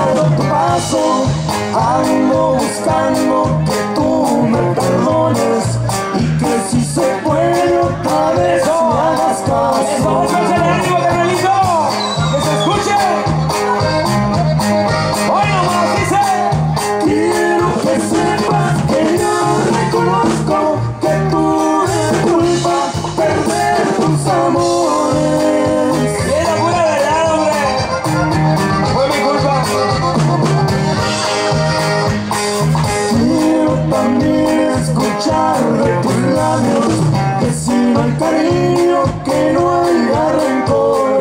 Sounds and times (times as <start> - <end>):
Music: 0.0 - 41.2
Speech: 9.6 - 13.7, 26.2 - 27.8, 28.8 - 29.8.